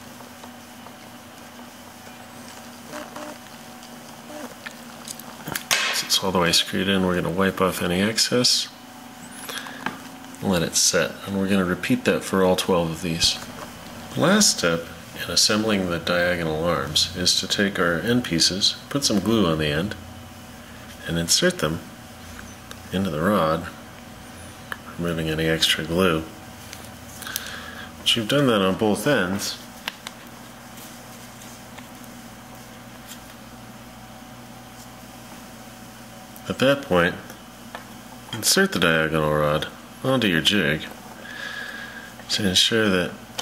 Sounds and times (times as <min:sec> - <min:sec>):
Speech: 0:06.0 - 0:08.8, 0:10.4 - 0:13.5, 0:14.1 - 0:20.0, 0:21.0 - 0:21.9, 0:22.9 - 0:23.8, 0:24.9 - 0:26.4, 0:28.0 - 0:29.7, 0:36.4 - 0:37.4, 0:38.3 - 0:41.0, 0:42.3 - 0:43.2.